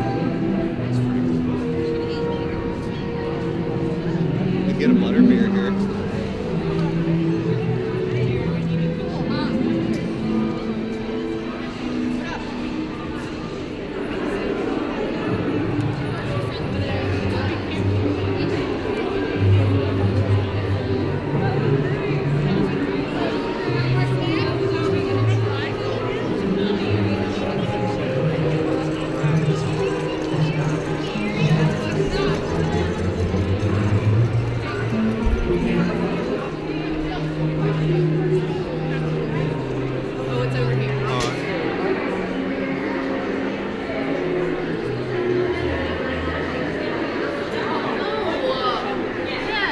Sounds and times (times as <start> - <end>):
Inside, public space: 0.0 - 49.7
Music: 0.0 - 49.7
Speech: 0.0 - 49.7.